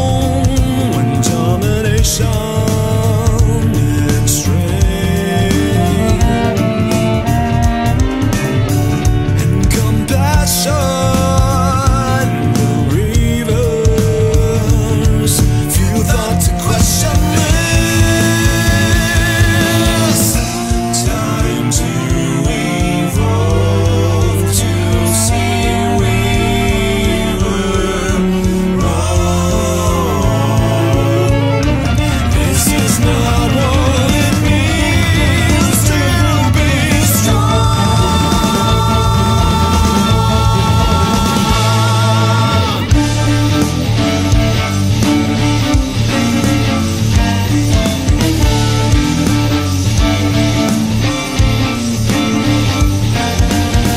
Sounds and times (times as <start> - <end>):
Cello: 0.0 - 53.9
Double bass: 0.0 - 53.9.